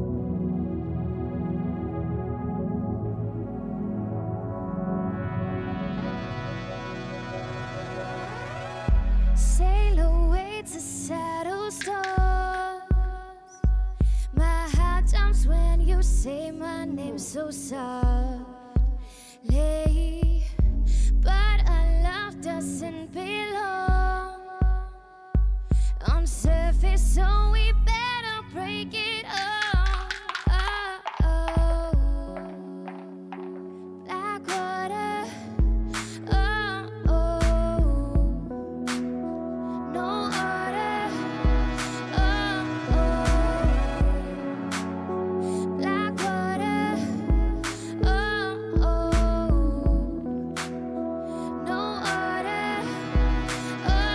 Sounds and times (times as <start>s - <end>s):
Music: 0.0s - 54.1s.